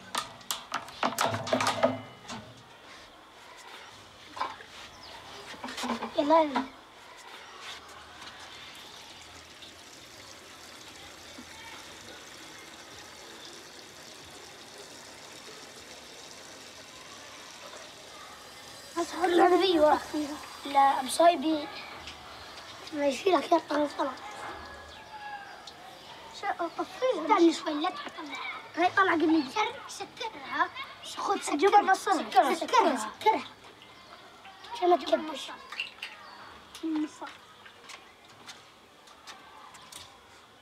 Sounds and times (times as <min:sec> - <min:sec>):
Speech: 0:06.1 - 0:08.6, 0:19.0 - 0:22.0, 0:22.6 - 0:33.5, 0:34.1 - 0:37.4
Boiling: 0:08.2 - 0:24.4.